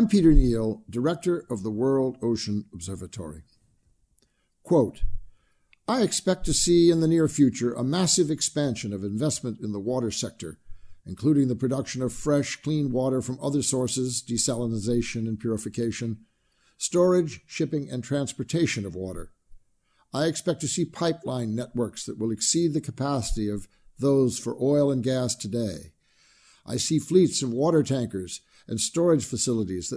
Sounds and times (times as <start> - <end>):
Speech: 0.0 - 3.4, 4.7 - 5.1, 5.9 - 16.2, 16.8 - 19.3, 20.1 - 26.0, 26.7 - 29.9.